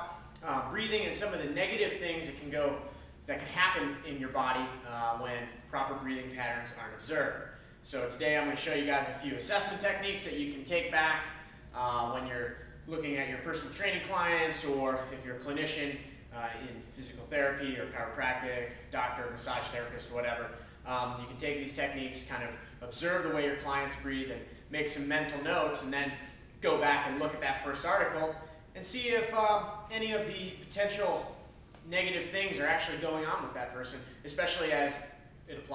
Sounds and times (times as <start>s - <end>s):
Speech: 0.0s - 35.7s.